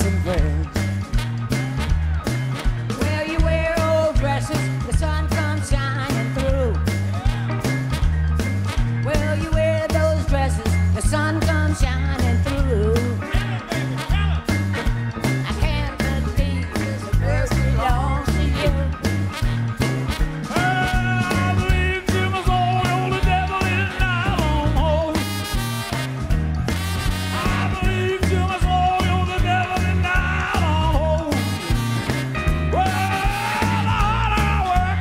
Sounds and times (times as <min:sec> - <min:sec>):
Music: 0:00.0 - 0:35.0.